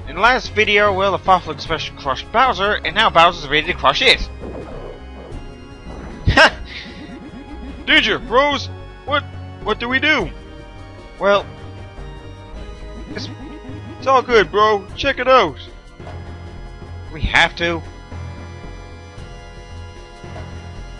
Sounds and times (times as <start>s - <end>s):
Speech: 0.1s - 4.3s, 7.9s - 10.3s, 11.2s - 11.5s, 14.0s - 15.7s, 17.1s - 17.8s.